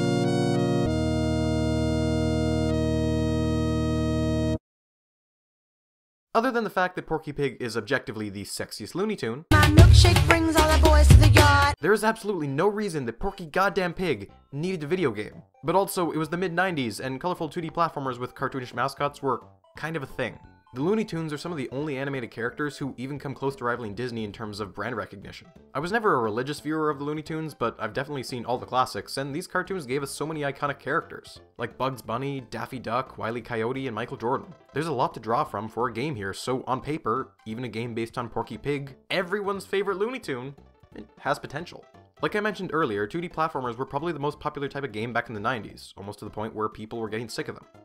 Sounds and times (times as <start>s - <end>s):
Music: 0.0s - 4.6s, 9.5s - 12.0s, 13.5s - 47.8s
Speech: 6.4s - 9.5s, 11.8s - 47.7s.